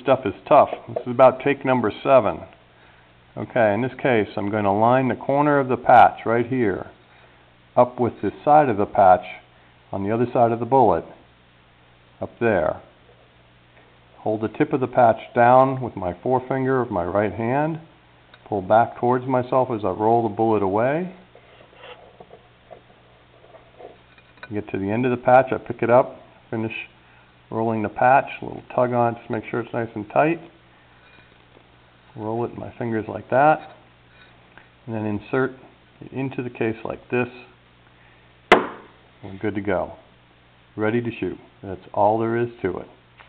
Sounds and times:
Speech: 0.0s - 2.6s, 3.4s - 7.0s, 7.8s - 11.2s, 12.2s - 12.9s, 14.2s - 21.2s, 24.4s - 30.6s, 32.1s - 33.8s, 34.8s - 37.6s, 39.2s - 40.1s, 40.8s - 43.0s
Inside, small room: 0.0s - 43.2s.

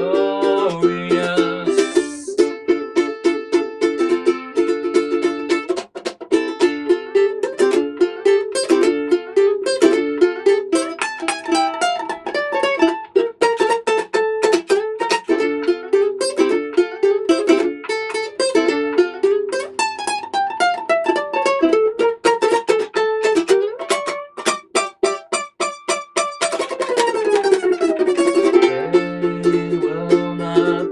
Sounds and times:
Guitar: 0.0s - 30.9s
Ukulele: 0.0s - 30.9s.

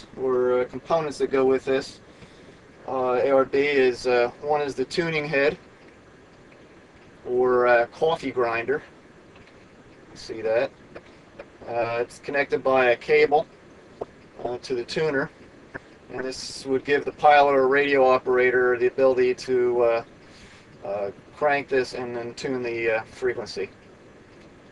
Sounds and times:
Speech: 0.0s - 2.0s, 2.9s - 5.6s, 7.2s - 8.9s, 10.2s - 10.7s, 11.6s - 13.5s, 14.4s - 15.3s, 16.1s - 20.1s, 20.8s - 23.7s.

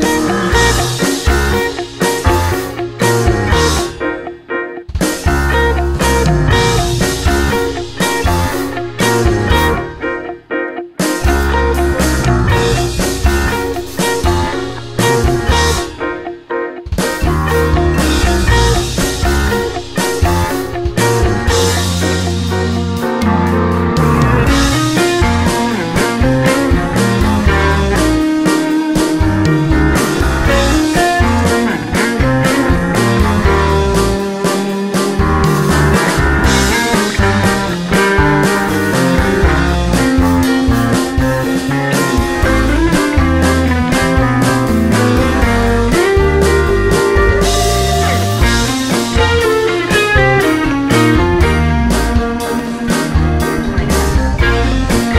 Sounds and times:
Music: 0.0s - 55.1s.

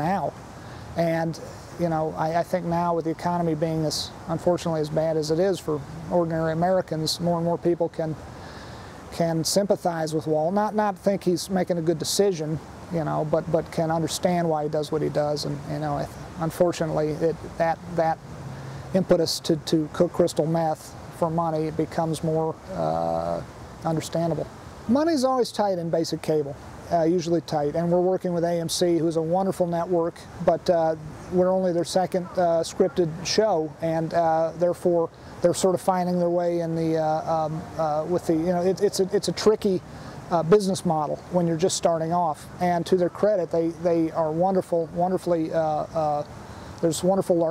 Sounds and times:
Speech: 0.0s - 0.4s, 1.0s - 8.2s, 9.1s - 18.2s, 19.0s - 47.5s.

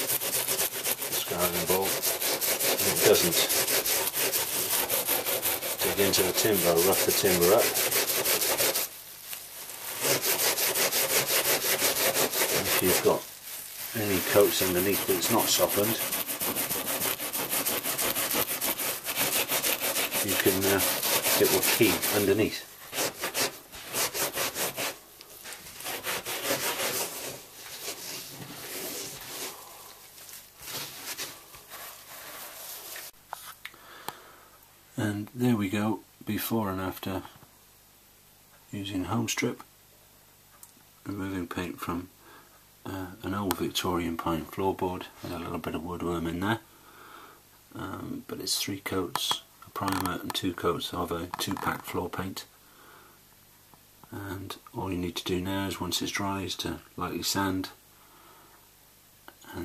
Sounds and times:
Speech: 1.1s - 2.0s, 2.7s - 3.6s, 5.8s - 7.8s, 12.5s - 13.3s, 13.9s - 16.1s, 20.2s - 22.7s, 35.0s - 37.4s, 38.7s - 39.7s, 41.0s - 42.1s, 42.8s - 46.7s, 47.7s - 52.5s, 54.1s - 57.8s, 59.4s - 59.6s.

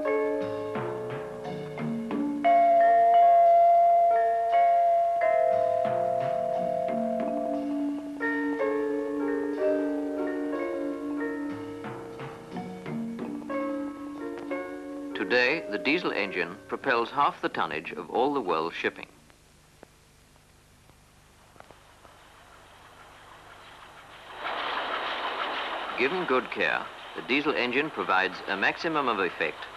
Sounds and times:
Speech: 15.2s - 19.2s, 26.0s - 29.7s.

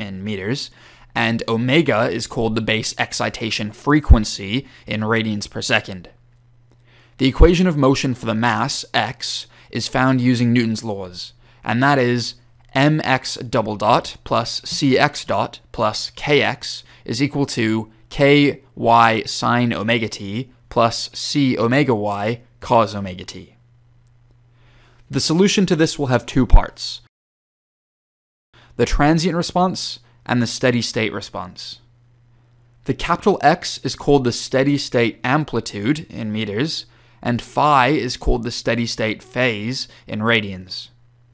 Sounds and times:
Speech: 0.0s - 6.2s, 7.2s - 23.6s, 25.1s - 27.1s, 28.8s - 31.9s, 32.8s - 41.0s.

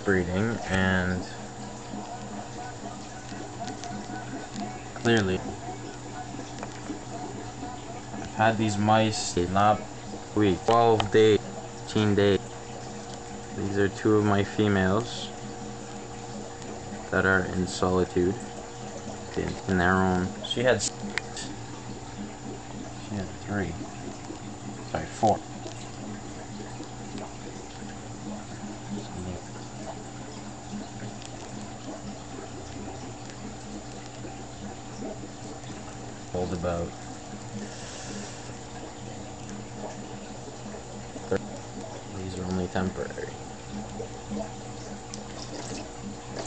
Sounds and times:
Patter: 0.1s - 9.0s, 23.7s - 46.4s.

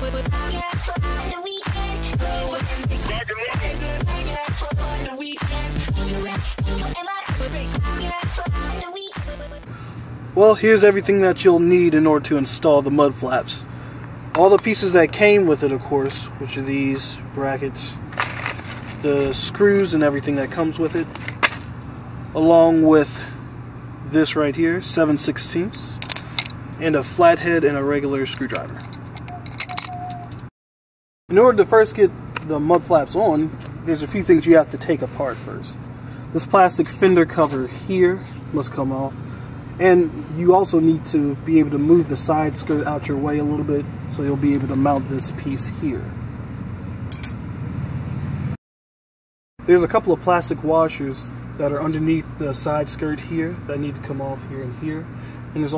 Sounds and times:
Outside, urban or manmade: 0.0s - 30.5s, 31.3s - 48.6s, 49.6s - 55.7s
Speech: 10.4s - 13.7s, 14.4s - 18.0s, 19.0s - 21.1s, 22.4s - 23.4s, 24.1s - 26.0s, 26.8s - 28.8s, 31.3s - 39.2s, 39.8s - 46.1s, 49.6s - 55.7s.

